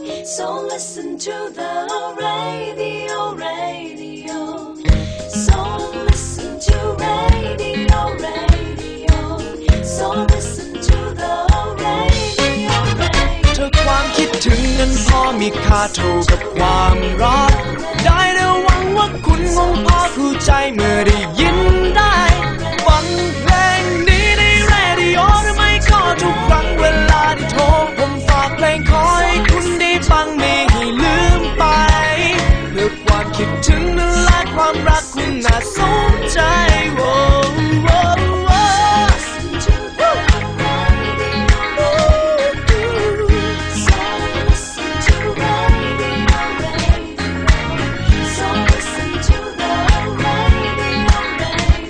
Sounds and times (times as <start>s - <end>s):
Music: 0.0s - 51.8s
Singing: 5.4s - 51.8s.